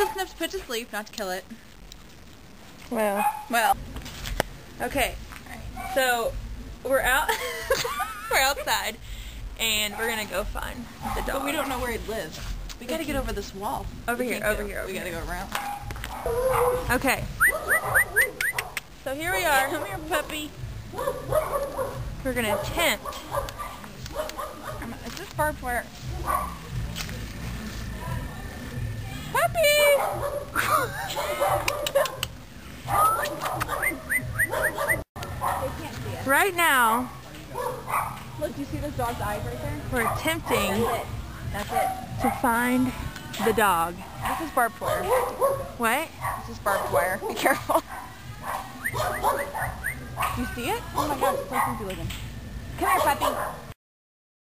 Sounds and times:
Bark: 0:00.0 - 0:00.4, 0:03.2 - 0:03.6, 0:09.9 - 0:10.3, 0:11.0 - 0:11.5, 0:15.5 - 0:18.8, 0:19.6 - 0:25.0, 0:26.2 - 0:26.6, 0:30.0 - 0:30.6, 0:31.2 - 0:32.3, 0:32.9 - 0:35.8, 0:37.0 - 0:38.3, 0:40.0 - 0:42.6, 0:44.0 - 0:51.9, 0:52.8 - 0:53.7.

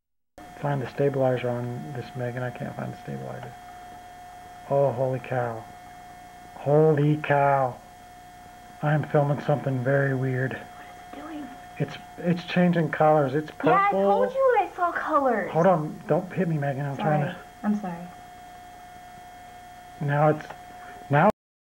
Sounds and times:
Speech: 0:00.6 - 0:03.6, 0:04.7 - 0:05.6, 0:06.6 - 0:07.8, 0:08.8 - 0:18.1, 0:20.0 - 0:21.4.

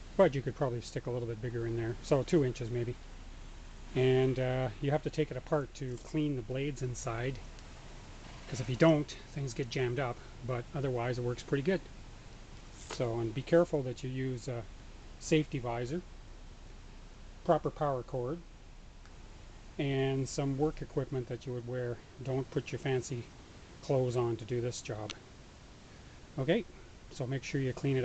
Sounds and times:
Speech: 0:00.2 - 0:03.0, 0:04.0 - 0:07.4, 0:08.5 - 0:11.9, 0:12.8 - 0:16.1, 0:17.4 - 0:18.5, 0:19.8 - 0:25.2, 0:26.4 - 0:28.0.

